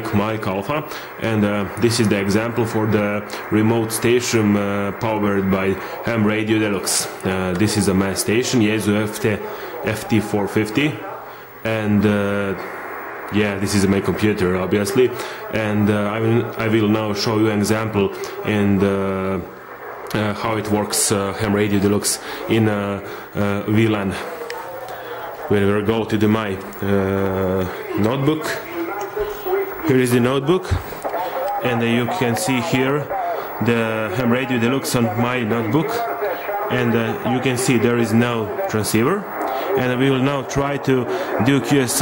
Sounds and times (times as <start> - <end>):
Speech: 0.0 - 12.7, 13.3 - 42.0.